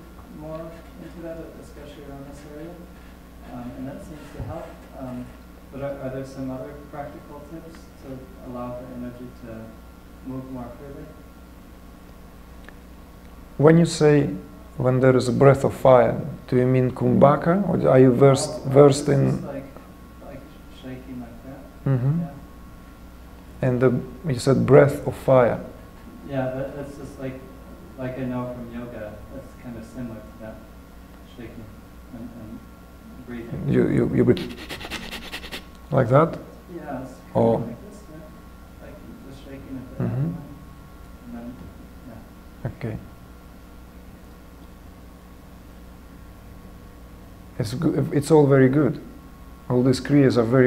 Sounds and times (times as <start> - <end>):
Speech: 0.3 - 11.2, 13.6 - 22.5, 23.6 - 34.6, 35.9 - 40.6, 41.2 - 43.1, 47.6 - 50.6.